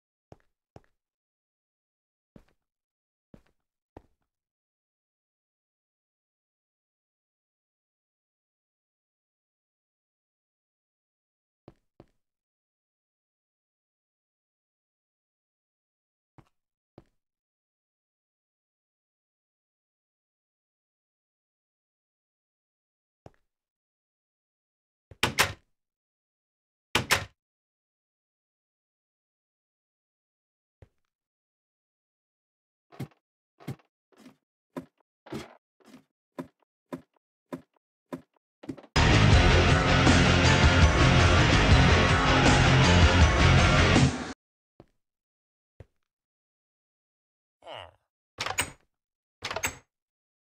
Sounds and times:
Music: 39.0 - 44.4.

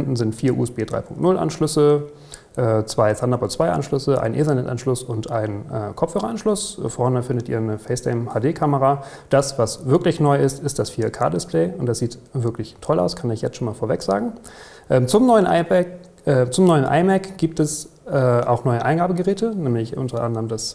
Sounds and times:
Speech: 0.0 - 20.7.

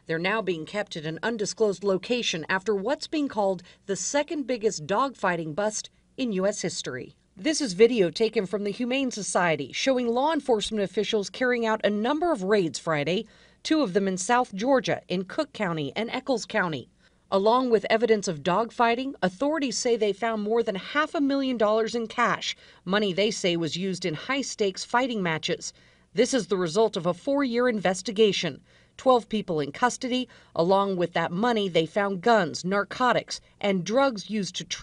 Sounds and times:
Speech: 0.0 - 34.8.

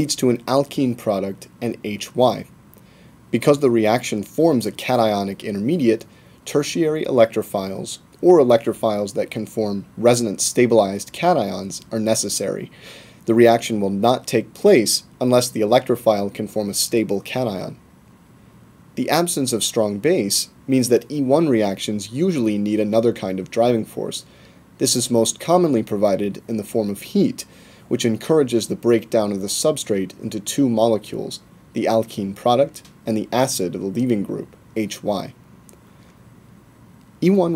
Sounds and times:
Speech: 0.0 - 2.5, 3.3 - 17.8, 19.0 - 35.4, 37.2 - 37.5.

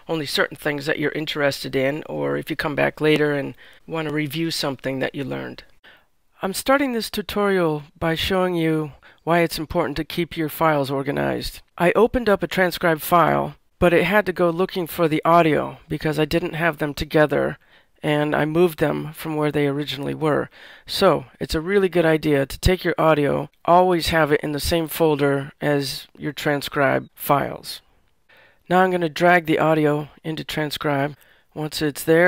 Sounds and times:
Speech: 0.0 - 5.7, 6.4 - 27.9, 28.7 - 32.2.

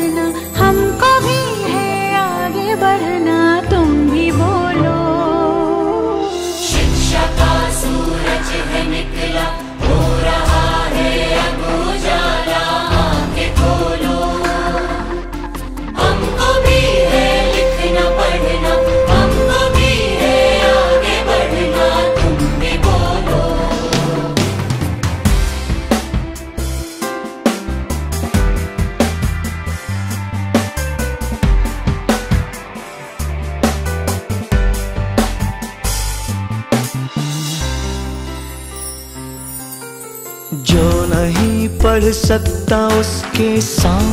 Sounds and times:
Tender music: 0.0 - 44.1.

